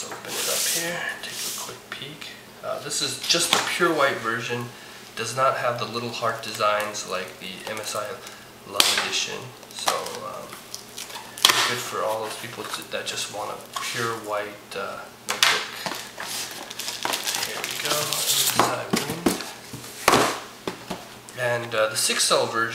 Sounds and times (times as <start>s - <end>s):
Speech: 0.0s - 10.6s, 11.6s - 15.8s, 17.5s - 19.5s, 21.3s - 22.7s.